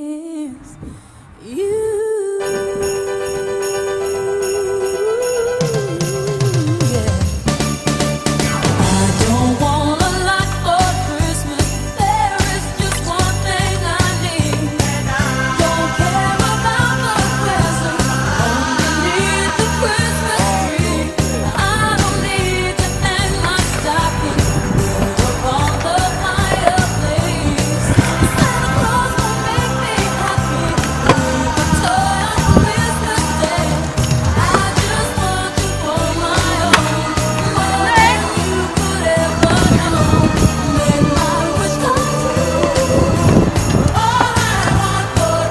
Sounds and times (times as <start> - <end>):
Music: 2.3 - 45.5
Skateboard: 23.1 - 35.0.